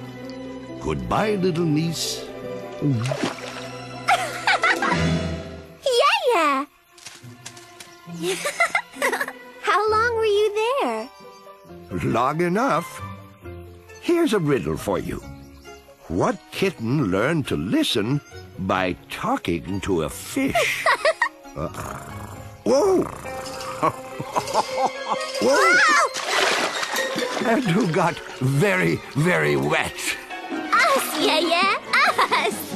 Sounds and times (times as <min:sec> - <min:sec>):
Music: 0:00.0 - 0:32.7
Outside, rural or natural: 0:00.0 - 0:32.7.